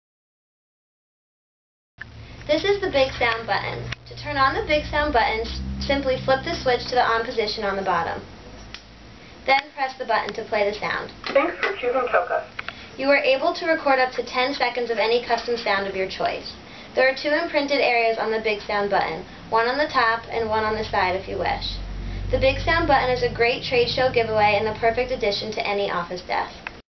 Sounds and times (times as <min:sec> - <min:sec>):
Speech: 0:02.5 - 0:08.2, 0:09.5 - 0:21.8, 0:22.4 - 0:26.6.